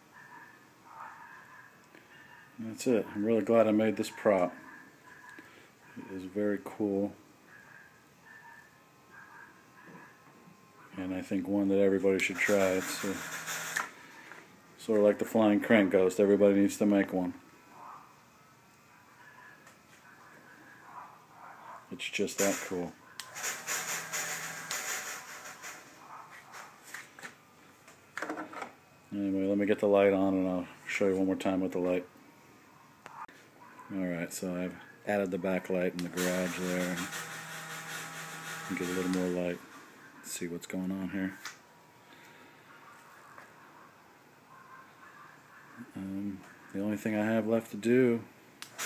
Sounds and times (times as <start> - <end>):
Speech: 2.6 - 5.3, 5.9 - 7.2, 10.8 - 13.2, 14.8 - 17.4, 21.9 - 23.0, 29.1 - 32.1, 33.9 - 37.1, 38.7 - 39.6, 40.2 - 41.4, 45.0 - 48.3.